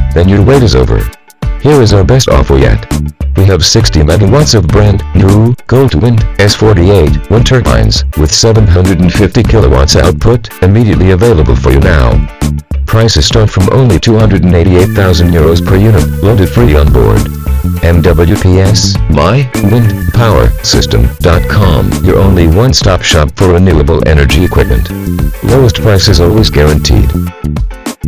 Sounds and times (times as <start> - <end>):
Music: 0.0 - 28.0
Speech: 0.2 - 12.2, 12.9 - 27.2.